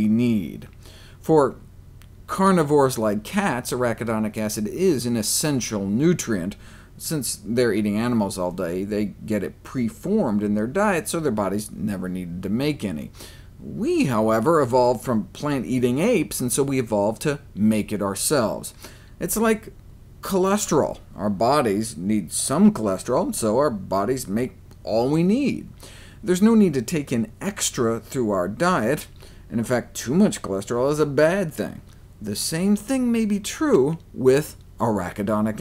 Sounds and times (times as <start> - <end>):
Speech: 0.0 - 1.6, 2.3 - 35.6.